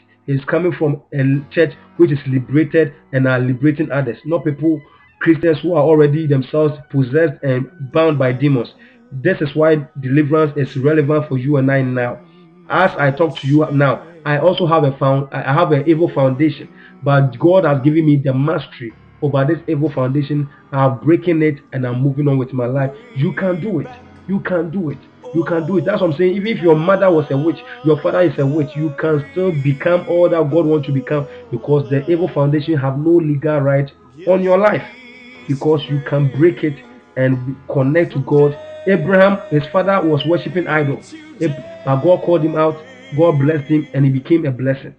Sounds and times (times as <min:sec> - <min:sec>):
Speech: 0:00.3 - 0:44.9.